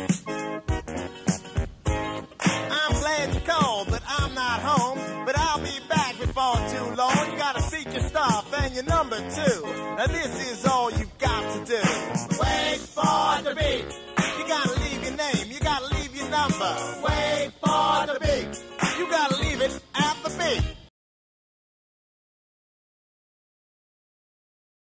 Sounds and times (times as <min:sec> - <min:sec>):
Music: 0:00.0 - 0:20.9.